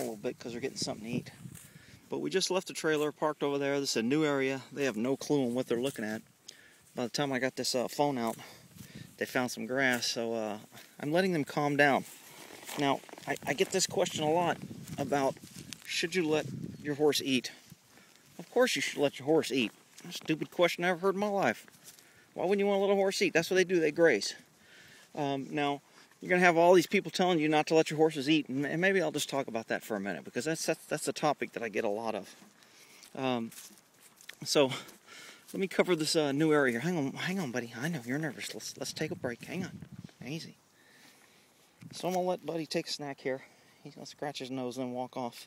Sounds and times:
Speech: 0.0s - 1.4s, 2.1s - 6.3s, 7.0s - 8.6s, 9.2s - 12.1s, 12.7s - 17.6s, 18.4s - 21.6s, 22.4s - 24.5s, 25.2s - 32.4s, 33.2s - 33.6s, 34.4s - 34.9s, 35.5s - 40.6s, 41.9s - 45.4s.

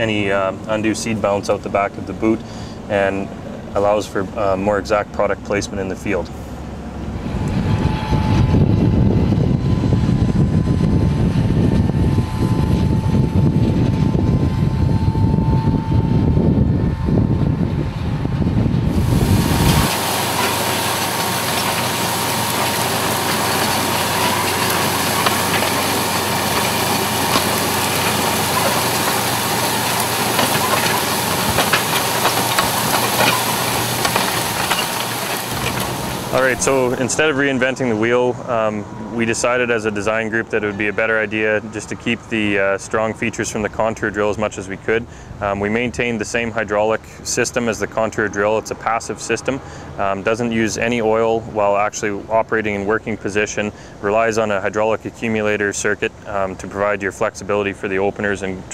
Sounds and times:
Speech: 0.0s - 6.4s, 36.3s - 58.7s
Vehicle: 0.0s - 58.7s.

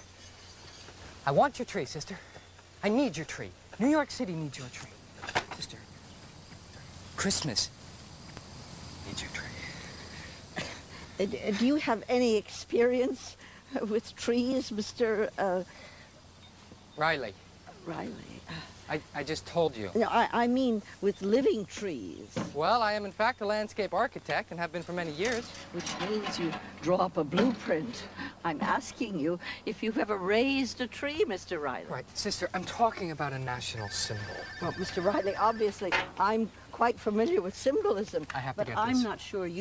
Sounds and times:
Outside, rural or natural: 0.0s - 39.6s.

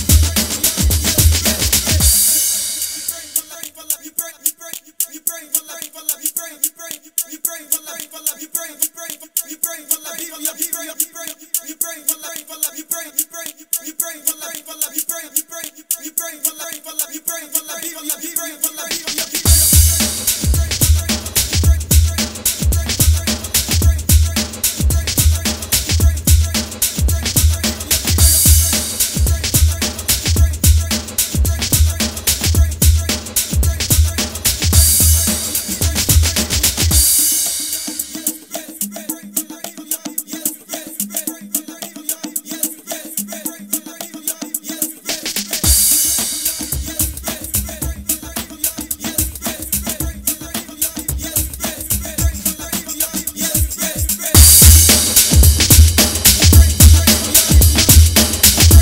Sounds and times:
Music: 0.0s - 58.8s.

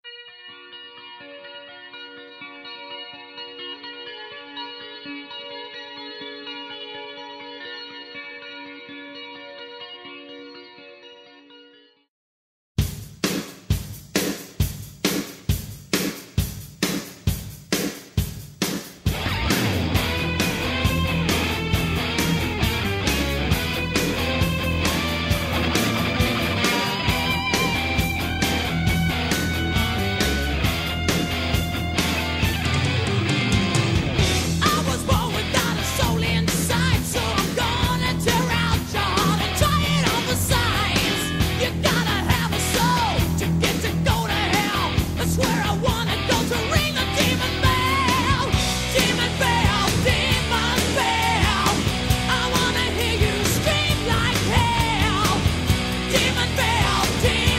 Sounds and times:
Music: 0.1s - 12.1s, 12.8s - 57.5s.

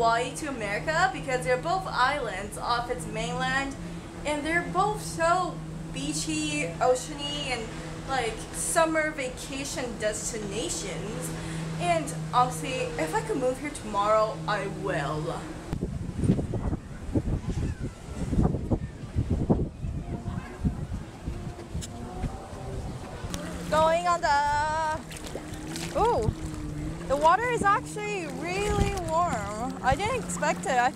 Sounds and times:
Speech: 0.0s - 15.5s, 27.1s - 30.9s
Outside, rural or natural: 0.0s - 30.9s
Outside, urban or manmade: 0.0s - 30.9s.

